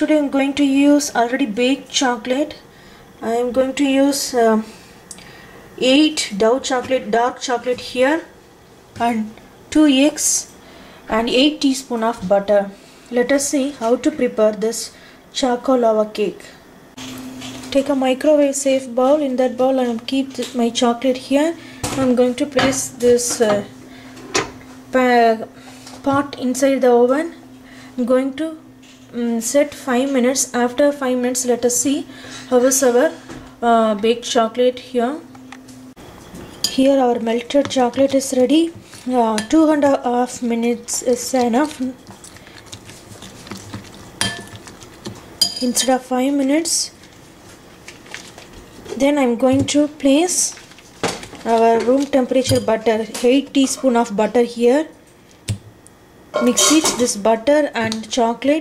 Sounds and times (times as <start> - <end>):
Speech: 0.0 - 2.6, 3.2 - 4.7, 5.8 - 8.3, 9.0 - 10.5, 11.1 - 16.6, 17.7 - 23.7, 25.0 - 27.4, 28.0 - 35.3, 36.7 - 42.0, 45.6 - 47.0, 48.9 - 50.6, 51.4 - 55.0, 56.4 - 58.6.